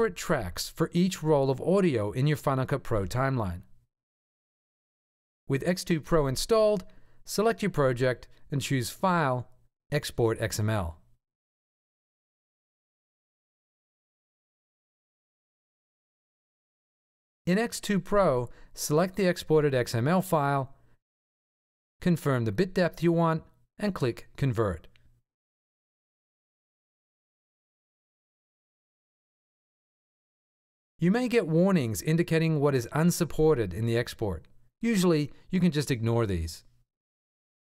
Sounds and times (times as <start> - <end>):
Speech: 0.0 - 3.7, 5.5 - 11.0, 17.5 - 20.8, 22.0 - 24.9, 31.0 - 36.7.